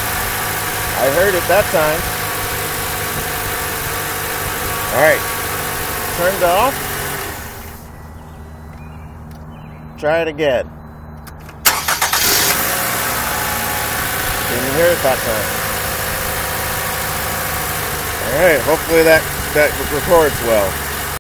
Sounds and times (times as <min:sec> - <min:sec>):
Speech: 0:01.0 - 0:02.1, 0:04.9 - 0:05.2, 0:06.1 - 0:06.8, 0:10.0 - 0:10.7, 0:14.5 - 0:15.5, 0:18.2 - 0:20.8.